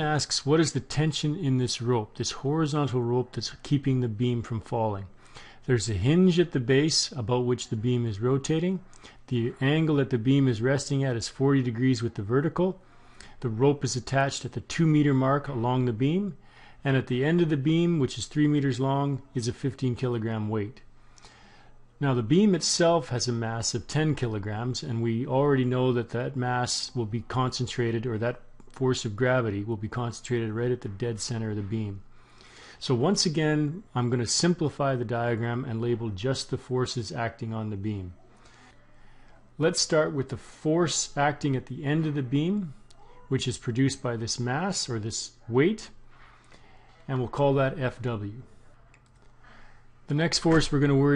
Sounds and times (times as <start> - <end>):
Speech: 0.0 - 12.8, 13.4 - 20.9, 22.0 - 32.1, 32.8 - 38.3, 39.6 - 46.0, 47.0 - 49.0, 50.1 - 51.1.